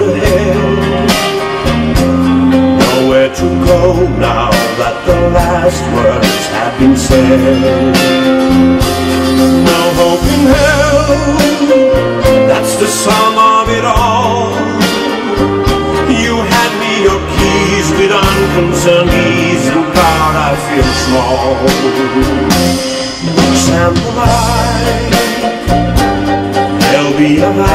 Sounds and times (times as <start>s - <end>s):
Music: 0.0s - 27.7s.